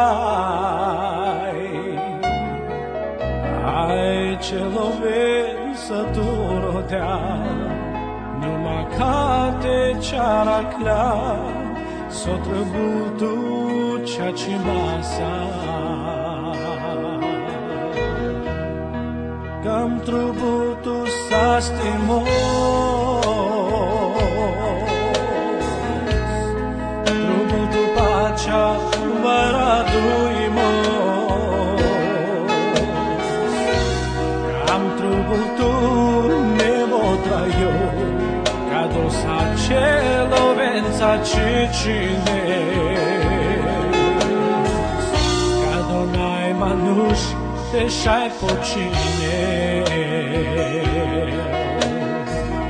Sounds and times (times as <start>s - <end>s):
Music: 0.0s - 52.6s.